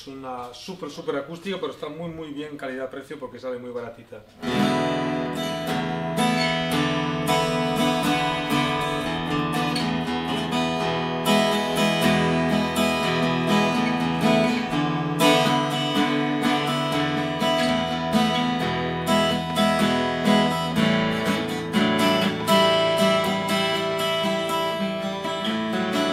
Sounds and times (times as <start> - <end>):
Acoustic guitar: 4.3 - 26.1
Electric guitar: 4.4 - 26.1
Strum: 4.4 - 26.1.